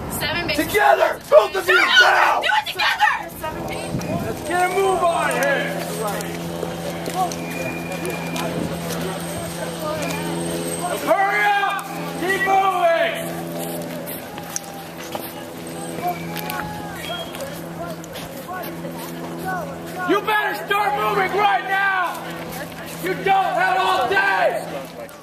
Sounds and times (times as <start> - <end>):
Speech: 15.2 - 25.2.